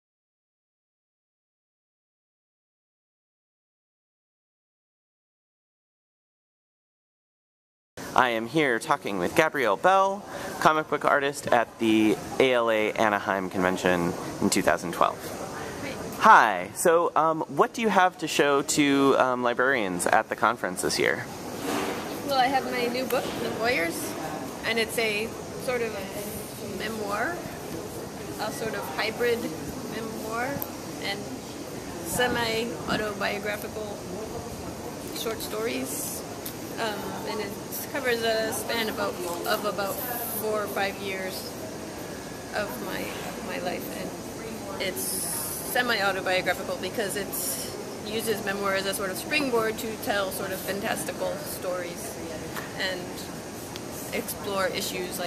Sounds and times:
Speech: 22.2s - 27.5s, 32.0s - 36.2s, 42.6s - 53.3s, 54.1s - 55.2s.

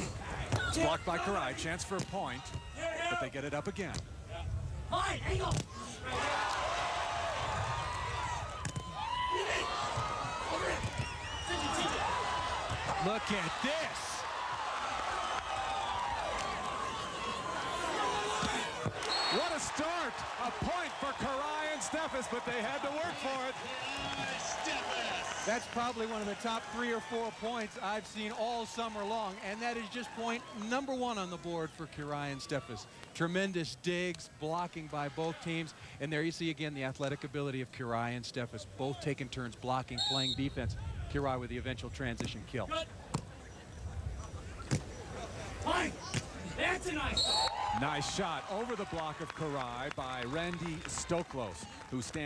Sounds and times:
Speech: 0.6s - 4.0s, 19.4s - 42.9s, 47.8s - 52.2s.

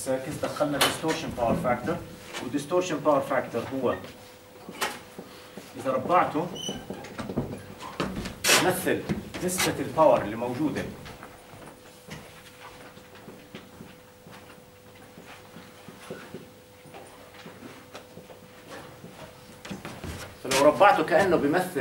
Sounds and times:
Speech: 0.0s - 4.1s, 5.8s - 6.6s, 8.5s - 11.1s, 20.4s - 21.8s.

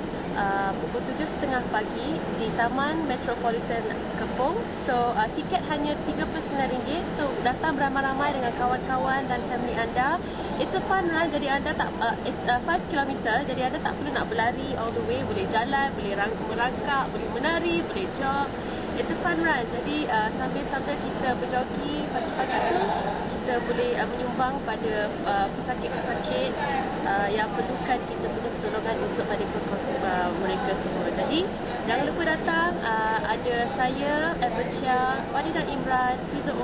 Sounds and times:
Speech: 0.4s - 36.6s.

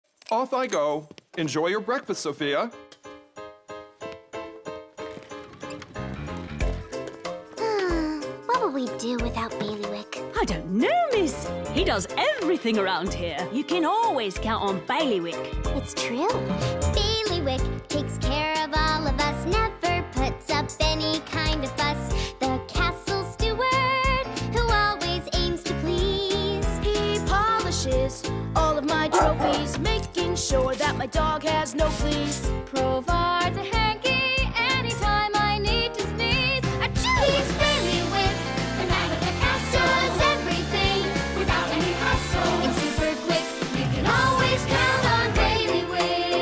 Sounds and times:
Music: 0.5s - 46.4s
Speech: 8.5s - 16.4s.

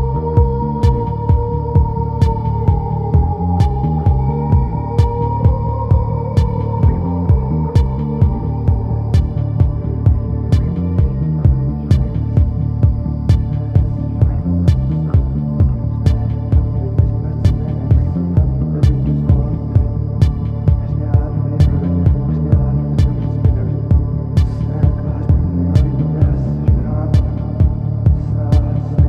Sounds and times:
Music: 0.0s - 29.0s.

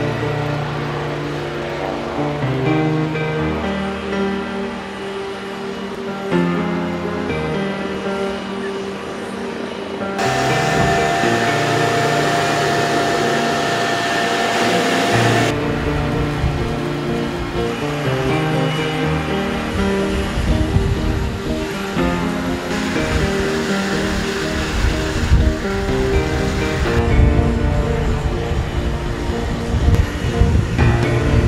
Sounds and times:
Music: 0.0s - 31.4s.

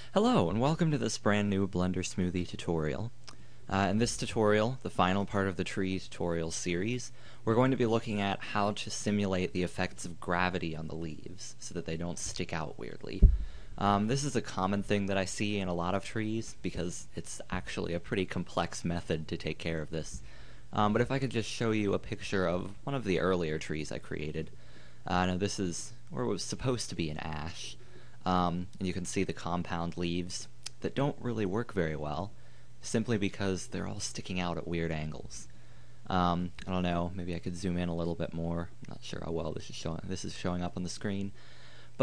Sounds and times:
Speech: 0.0s - 35.5s, 36.1s - 41.4s.

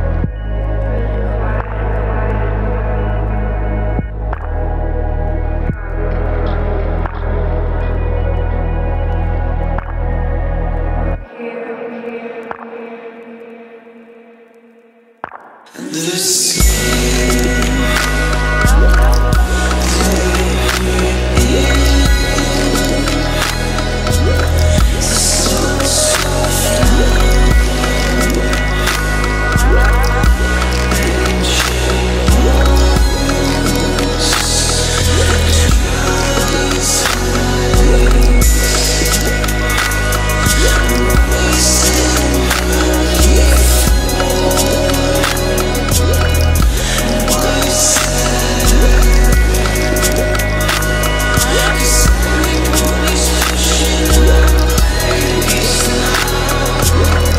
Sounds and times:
Background music: 0.0s - 57.3s.

